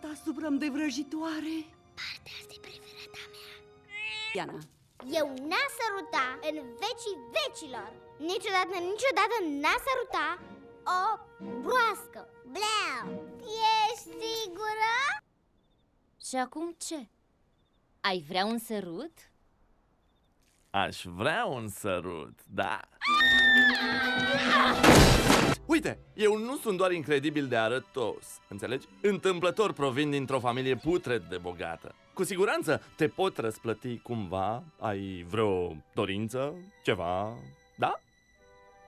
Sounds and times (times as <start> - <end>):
Music: 0.0 - 15.2, 23.0 - 38.8.